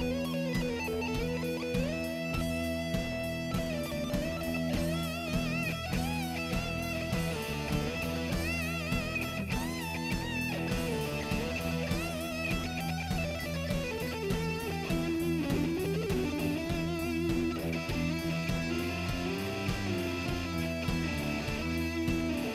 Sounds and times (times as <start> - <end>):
Music: 0.0 - 22.5.